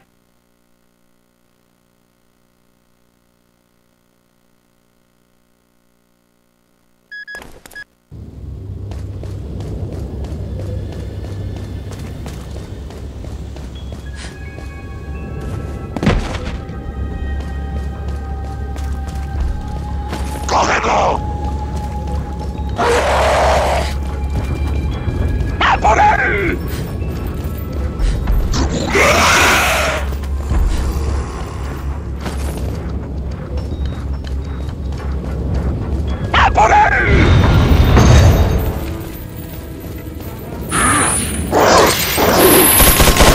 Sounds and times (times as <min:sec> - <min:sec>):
Run: 0:08.2 - 0:20.5, 0:21.2 - 0:22.8, 0:23.9 - 0:25.6, 0:30.1 - 0:36.4
Speech: 0:20.5 - 0:21.2, 0:25.6 - 0:26.6, 0:36.4 - 0:37.2.